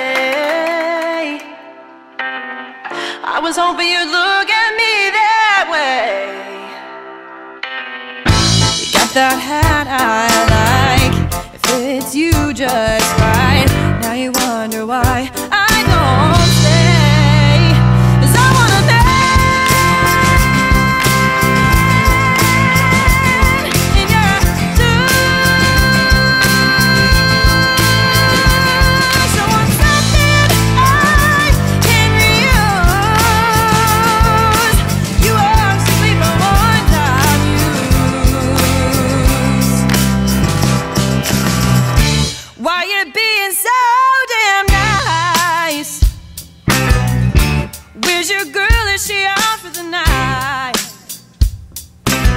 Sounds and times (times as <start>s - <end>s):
Happy music: 0.0s - 52.3s.